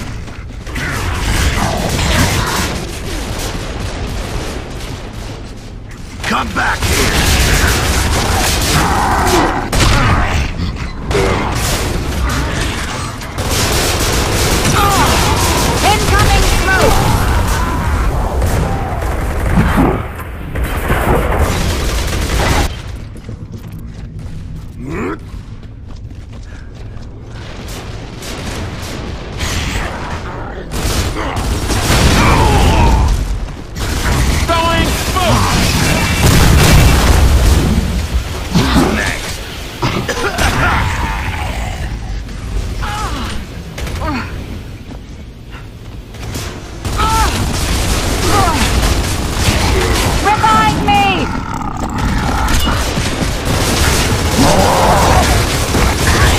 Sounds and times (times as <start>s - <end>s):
Speech: 15.8s - 17.1s, 49.8s - 51.5s.